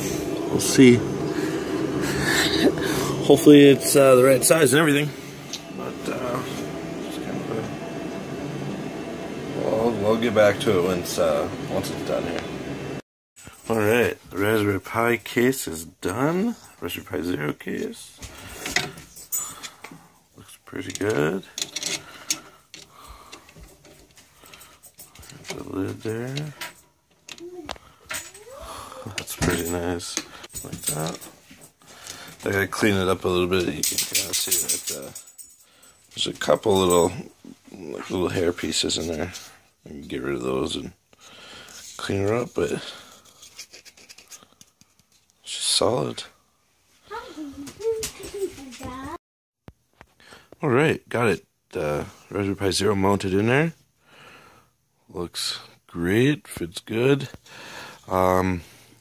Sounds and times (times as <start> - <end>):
Speech: 0.5 - 1.0, 3.2 - 5.2, 5.8 - 7.7, 9.6 - 12.5, 13.7 - 18.2, 32.4 - 35.2, 36.2 - 41.0, 42.0 - 43.0, 50.6 - 53.8, 55.1 - 57.3
Scrape: 38.9 - 39.6, 41.6 - 45.1.